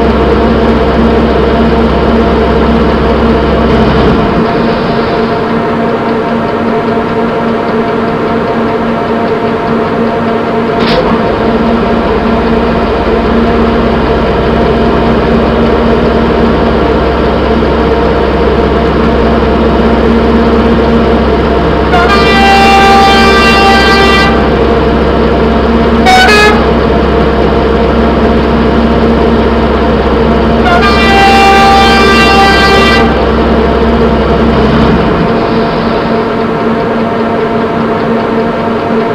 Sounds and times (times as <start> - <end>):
Outside, urban or manmade: 0.0 - 39.1
Railroad car, train wagon: 0.0 - 39.1
Train: 0.0 - 39.1.